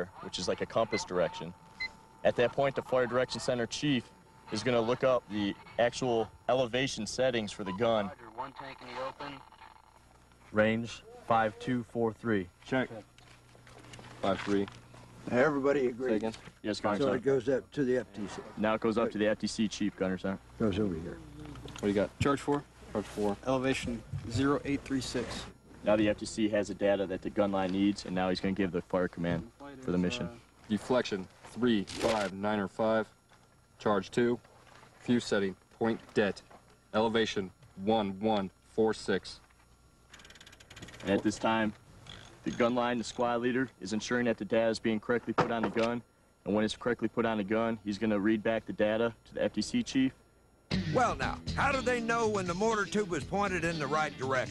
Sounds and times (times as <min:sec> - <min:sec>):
Radio: 0:00.0 - 0:01.6, 0:02.2 - 0:09.9, 0:51.6 - 0:54.5
Speech: 0:00.0 - 0:01.6, 0:02.2 - 0:09.4, 0:10.5 - 0:13.1, 0:14.2 - 0:14.7, 0:15.3 - 0:33.2, 0:33.8 - 0:34.4, 0:35.1 - 0:39.4, 0:41.0 - 0:41.8, 0:42.5 - 0:50.2, 0:51.0 - 0:54.5.